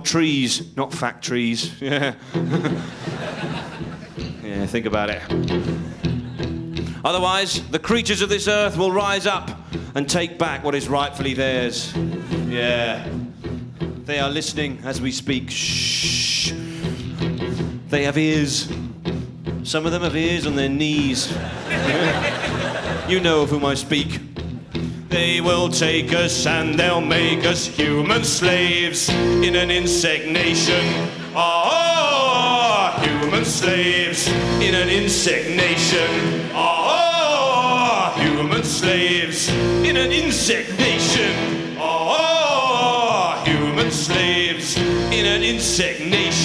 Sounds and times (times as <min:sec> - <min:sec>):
Speech: 0:00.0 - 0:02.1, 0:04.4 - 0:05.4, 0:07.0 - 0:13.1, 0:14.1 - 0:16.6, 0:17.9 - 0:18.8, 0:19.7 - 0:21.4, 0:23.1 - 0:24.3
Music: 0:00.0 - 0:46.4.